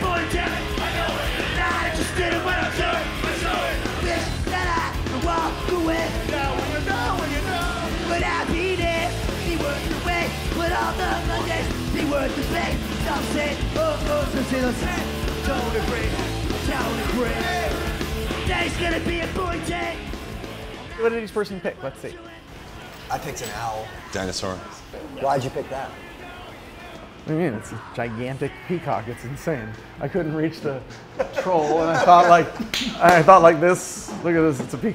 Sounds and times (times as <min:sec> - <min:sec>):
House music: 0:00.0 - 0:22.5.